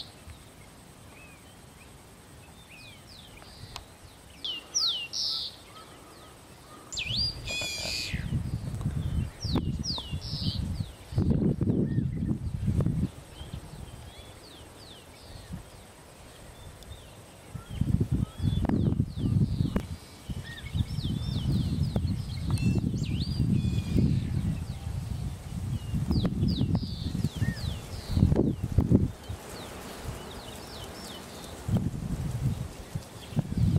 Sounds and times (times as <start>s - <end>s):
Bird: 0.0s - 12.4s
Rustling leaves: 0.0s - 33.7s.